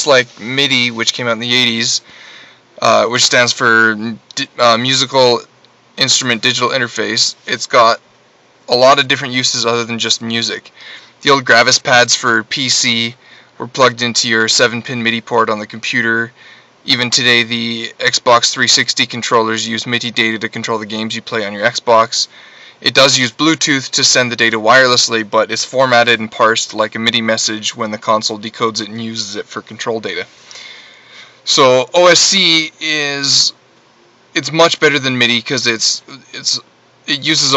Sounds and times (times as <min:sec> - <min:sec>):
Speech: 0:00.0 - 0:02.1, 0:02.8 - 0:08.0, 0:08.7 - 0:30.3, 0:31.4 - 0:33.6, 0:34.4 - 0:37.5.